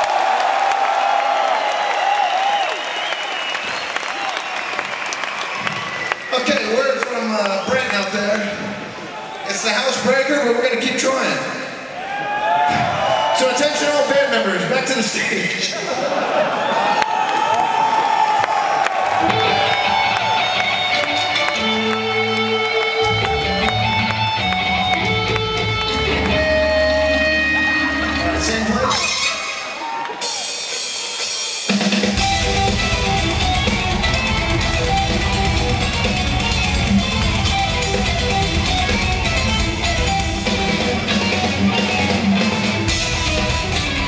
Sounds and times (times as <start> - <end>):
Music: 19.2 - 44.0.